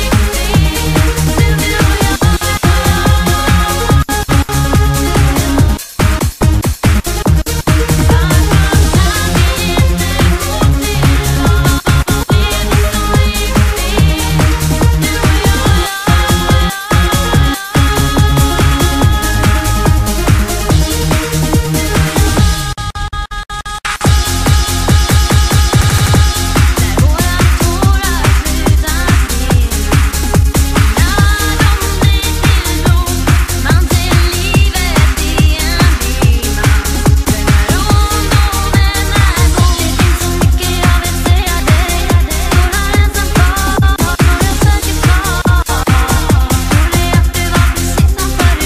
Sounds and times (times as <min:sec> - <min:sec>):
Techno: 0:00.0 - 0:48.6.